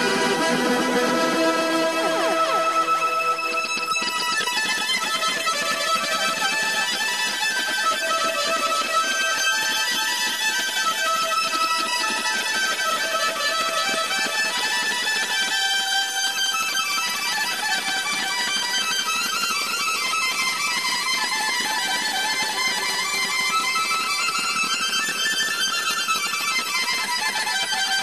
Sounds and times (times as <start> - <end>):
Music: 0.0 - 28.0.